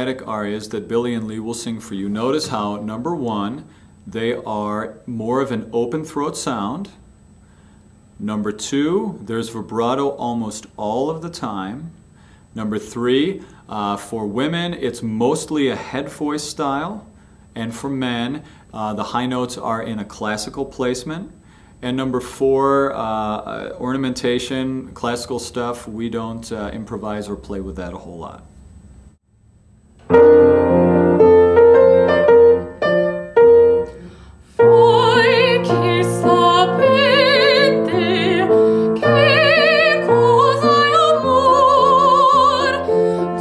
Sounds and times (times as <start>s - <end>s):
Speech: 0.0s - 7.0s, 8.2s - 11.9s, 12.6s - 28.5s.